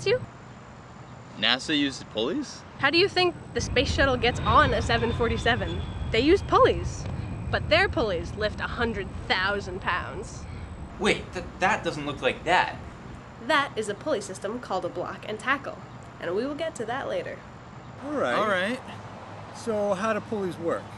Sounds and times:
Speech: 1.4s - 7.0s, 11.0s - 12.8s, 18.0s - 19.0s, 19.6s - 20.9s.

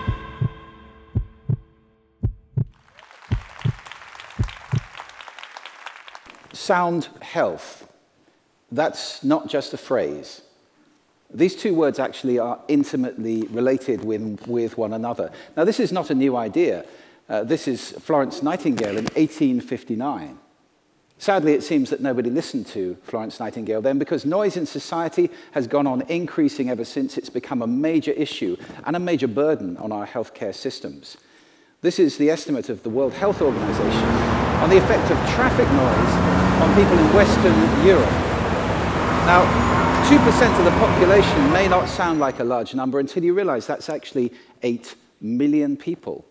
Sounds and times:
Speech: 6.6s - 8.0s, 8.7s - 10.5s, 11.3s - 20.4s, 21.2s - 31.2s, 31.8s - 38.2s, 39.3s - 46.3s.

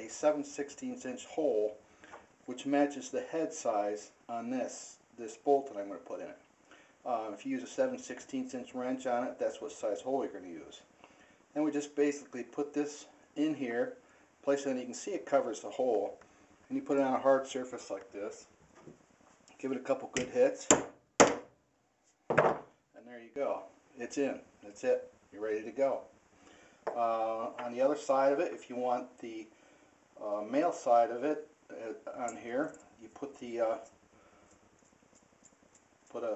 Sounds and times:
Speech: 0.0s - 1.8s, 2.5s - 6.4s, 7.0s - 10.9s, 11.6s - 18.5s, 19.6s - 20.8s, 23.0s - 26.1s, 26.9s - 29.5s, 30.2s - 33.9s, 36.1s - 36.3s.

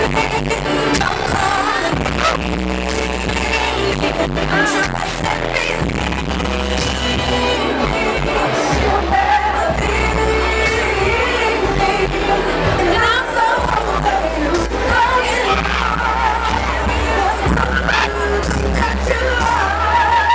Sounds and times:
Crowd: 0.0s - 20.3s.

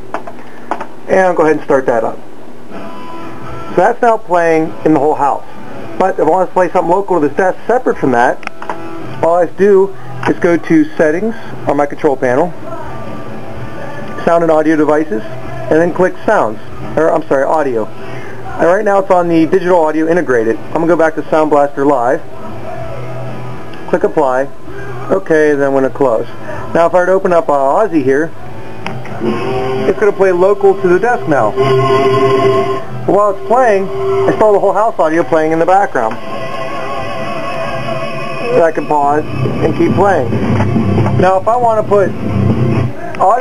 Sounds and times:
Speech: 1.1s - 2.2s, 3.7s - 5.4s, 6.0s - 8.4s, 9.2s - 12.9s, 14.2s - 17.9s, 18.5s - 22.8s, 23.9s - 28.3s, 29.9s - 31.6s, 33.1s - 36.2s, 38.5s - 40.3s, 41.2s - 42.1s, 42.9s - 43.4s
Music: 2.7s - 43.4s.

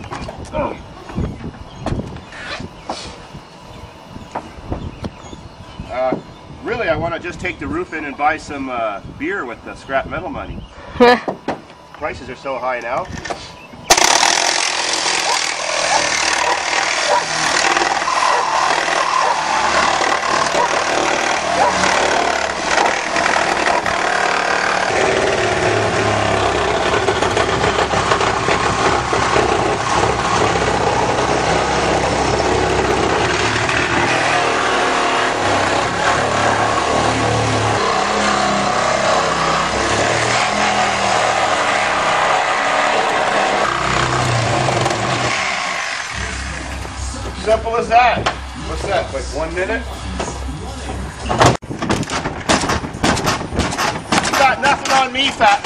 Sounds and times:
Jackhammer: 13.9s - 46.4s.

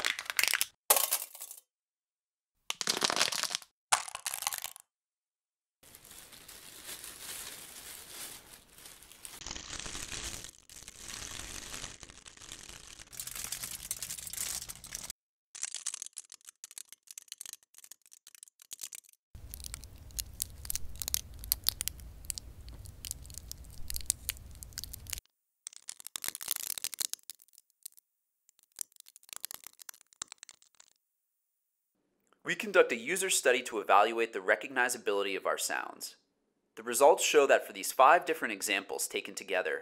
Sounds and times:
Crumpling, crinkling: 0.0s - 0.7s, 2.7s - 4.8s, 5.8s - 31.0s
Tearing: 5.9s - 28.0s, 28.6s - 31.0s.

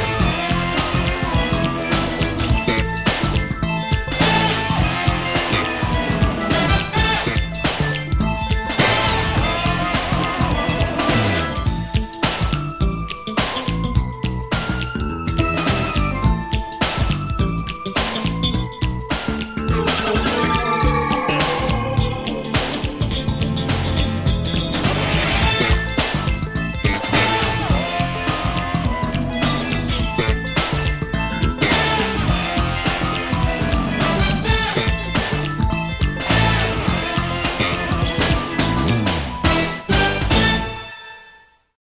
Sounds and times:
Music: 0.0s - 41.8s.

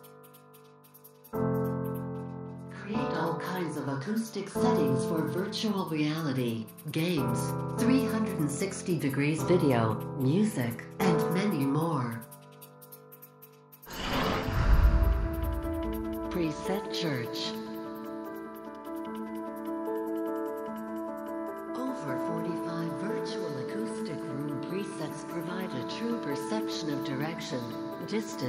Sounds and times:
Music: 0.0s - 28.4s
Speech: 2.8s - 12.3s, 16.3s - 17.7s, 21.8s - 28.4s.

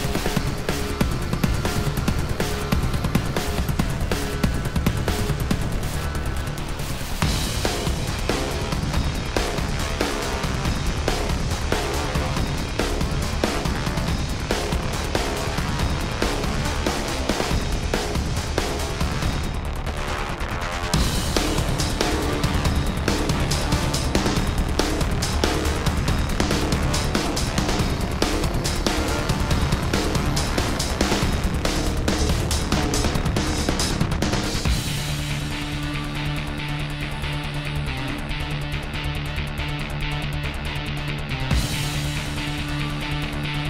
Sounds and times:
Music: 0.0s - 43.6s.

